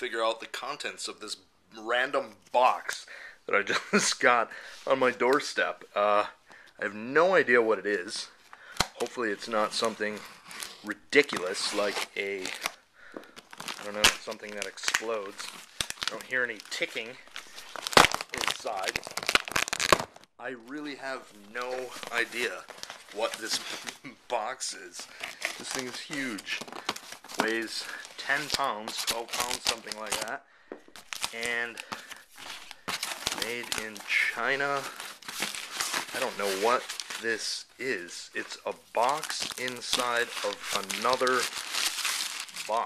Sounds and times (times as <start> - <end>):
Speech: 0.0 - 8.3, 9.0 - 10.2, 10.8 - 12.6, 13.8 - 15.5, 16.1 - 17.2, 18.4 - 19.0, 20.4 - 26.6, 27.4 - 30.4, 31.4 - 31.8, 33.4 - 35.0, 36.1 - 41.5.